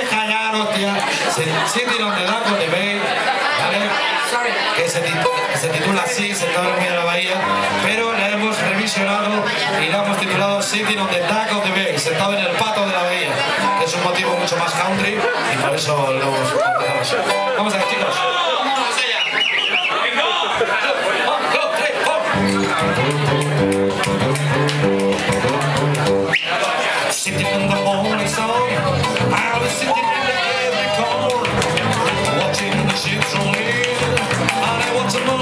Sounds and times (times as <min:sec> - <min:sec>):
Speech: 0:00.0 - 0:24.3, 0:26.5 - 0:35.4
Music: 0:05.0 - 0:12.1, 0:13.3 - 0:15.2, 0:16.6 - 0:18.2, 0:22.3 - 0:26.5, 0:27.1 - 0:35.4.